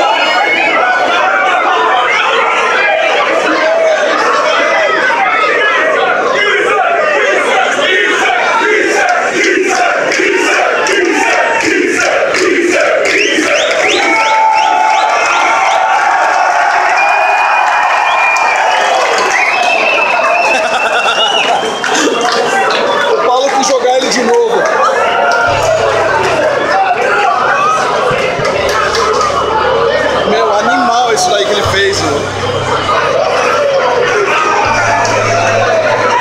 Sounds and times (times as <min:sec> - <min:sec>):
Inside, large room or hall: 0:00.0 - 0:36.2
Speech: 0:22.2 - 0:24.8, 0:25.5 - 0:36.1.